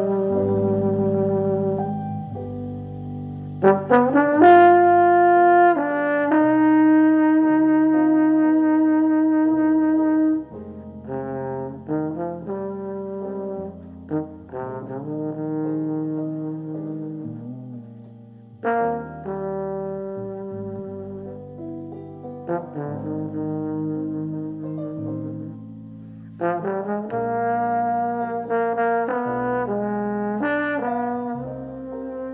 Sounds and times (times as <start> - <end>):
Trombone: 0.0 - 32.3.